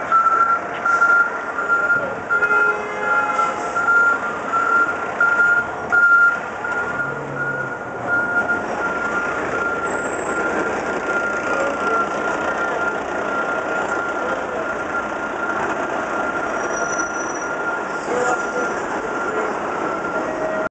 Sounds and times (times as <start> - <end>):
Reversing beeps: 0.1 - 2.5, 3.4 - 20.7.